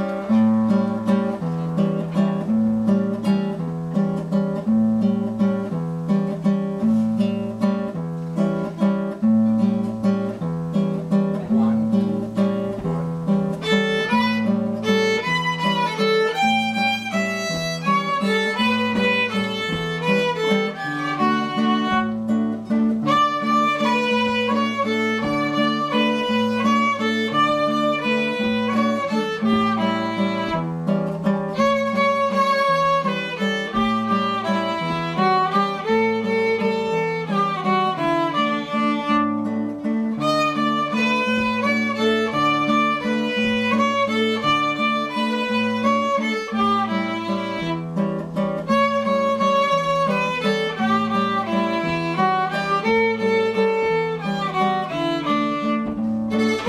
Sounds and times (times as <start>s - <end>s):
Violin, fiddle: 0.0s - 4.0s, 8.6s - 56.6s
Acoustic guitar: 0.0s - 56.6s.